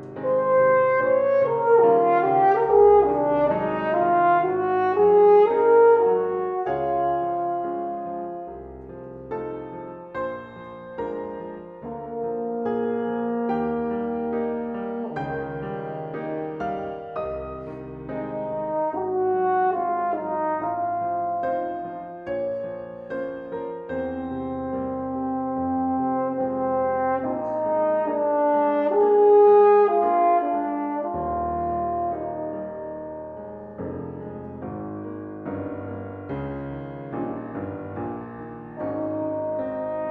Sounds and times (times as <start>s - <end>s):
Piano: 0.0s - 40.1s.